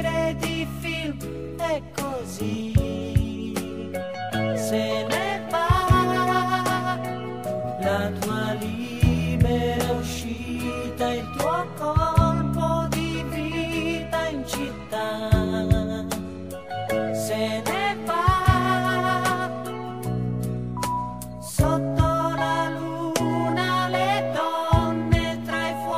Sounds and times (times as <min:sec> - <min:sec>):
Music: 0:00.0 - 0:25.9.